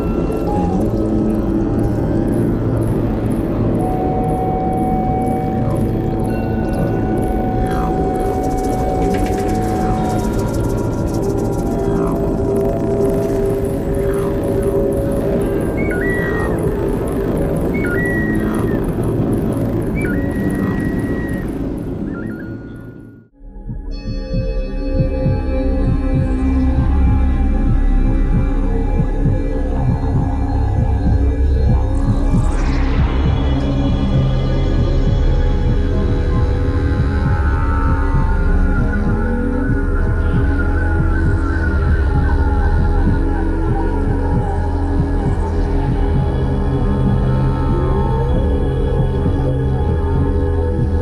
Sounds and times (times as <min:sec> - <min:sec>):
Didgeridoo: 0:00.0 - 0:22.9, 0:23.5 - 0:51.0.